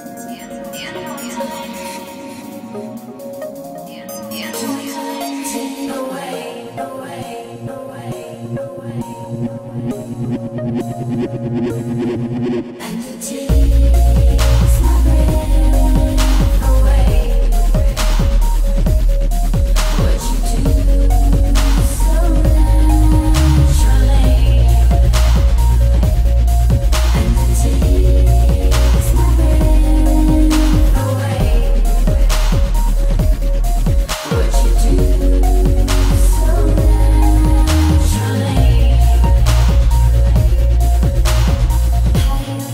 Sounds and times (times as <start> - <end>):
Dubstep: 0.0 - 42.7.